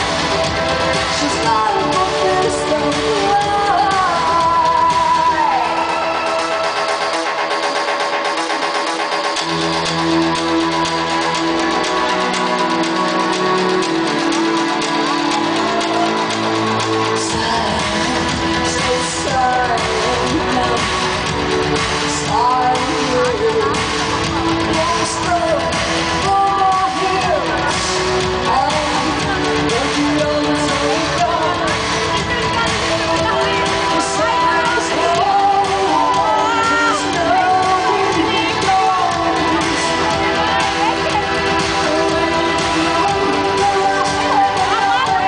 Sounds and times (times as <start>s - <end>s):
Music: 0.0s - 45.2s.